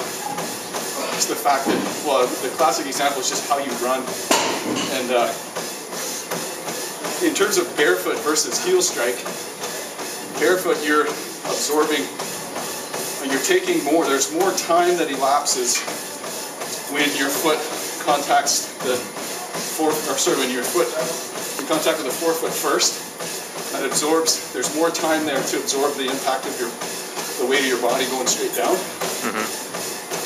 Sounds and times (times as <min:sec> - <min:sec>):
Run: 0:00.0 - 0:04.3, 0:05.0 - 0:30.2
Speech: 0:01.0 - 0:04.1, 0:04.9 - 0:05.4, 0:07.2 - 0:09.2, 0:10.4 - 0:12.2, 0:13.2 - 0:15.9, 0:16.9 - 0:19.1, 0:19.7 - 0:23.0, 0:23.7 - 0:26.8, 0:27.4 - 0:29.5.